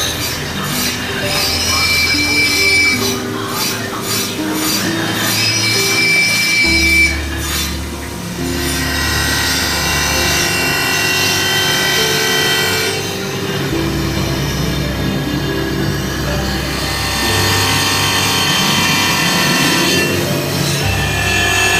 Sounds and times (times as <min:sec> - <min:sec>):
Music: 0:00.0 - 0:21.7.